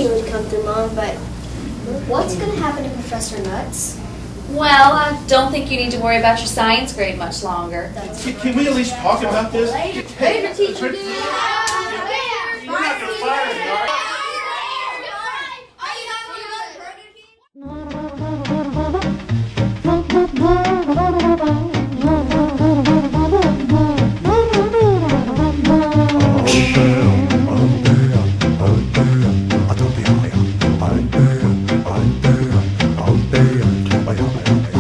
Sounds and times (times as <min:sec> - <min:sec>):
Swing music: 0:17.6 - 0:34.8.